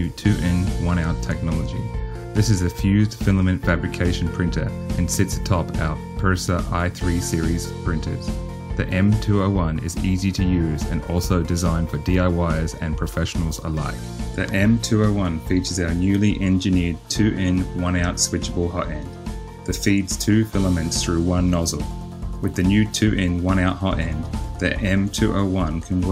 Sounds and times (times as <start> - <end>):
Speech: 0.0 - 19.1, 19.7 - 26.1
Music: 0.0 - 26.1.